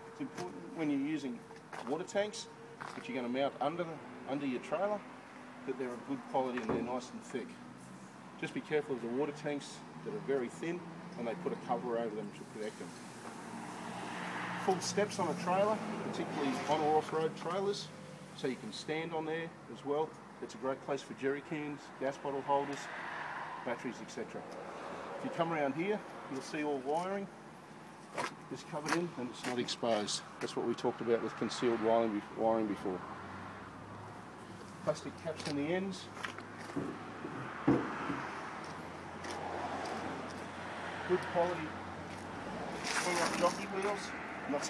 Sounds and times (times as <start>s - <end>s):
Speech: 0.2s - 5.0s, 5.7s - 7.6s, 8.4s - 12.9s, 14.6s - 22.9s, 23.7s - 24.5s, 25.2s - 27.3s, 28.5s - 33.0s, 34.8s - 36.2s, 41.1s - 41.8s, 43.0s - 44.6s.